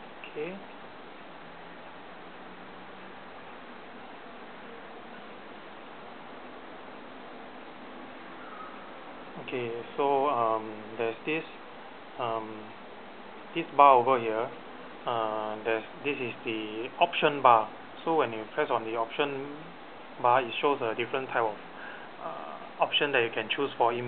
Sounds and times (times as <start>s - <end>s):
Speech: 0.2s - 0.7s, 9.4s - 11.6s, 12.2s - 12.8s, 13.5s - 21.6s, 22.2s - 24.0s.